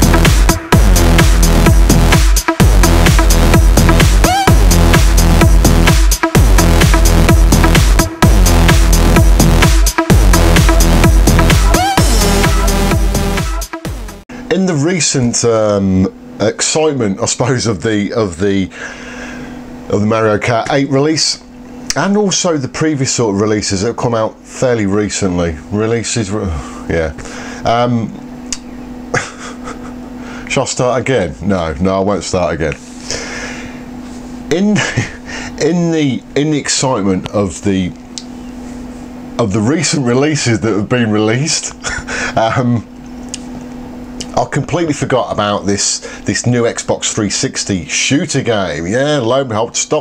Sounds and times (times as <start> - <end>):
Speech: 14.5 - 18.8, 19.9 - 28.2, 30.5 - 32.8, 34.5 - 38.0, 39.4 - 41.8, 42.4 - 42.9, 44.2 - 50.0.